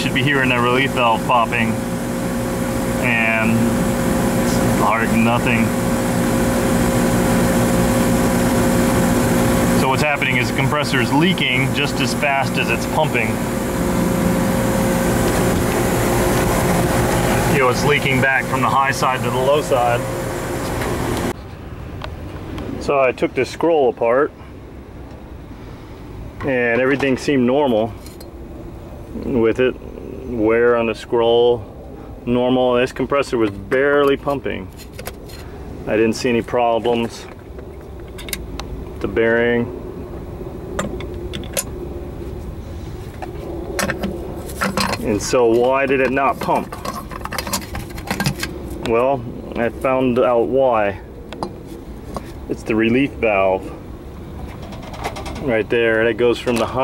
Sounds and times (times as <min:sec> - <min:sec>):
Speech: 0:00.0 - 0:01.8, 0:03.0 - 0:03.7, 0:04.4 - 0:05.8, 0:09.8 - 0:13.4, 0:17.5 - 0:20.1, 0:22.8 - 0:24.4, 0:26.4 - 0:28.0, 0:29.2 - 0:34.7, 0:35.9 - 0:37.4, 0:39.0 - 0:39.7, 0:45.0 - 0:46.9, 0:48.8 - 0:51.1, 0:52.5 - 0:53.8, 0:55.4 - 0:56.8.